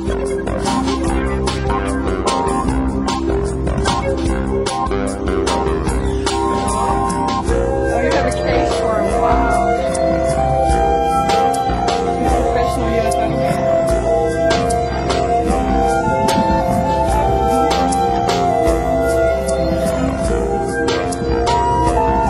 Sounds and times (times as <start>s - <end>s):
Music: 0.0s - 22.2s
Speech: 7.9s - 9.8s, 12.2s - 13.9s.